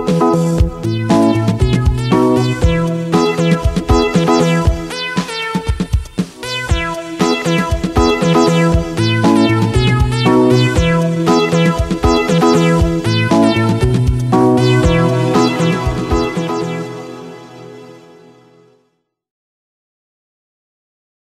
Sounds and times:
Music: 0.0s - 19.3s.

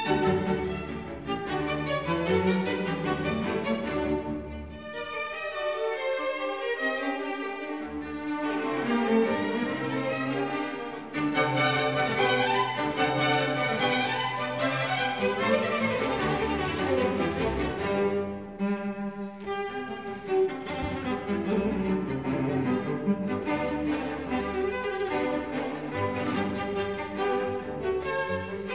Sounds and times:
Violin, fiddle: 0.0s - 28.7s.

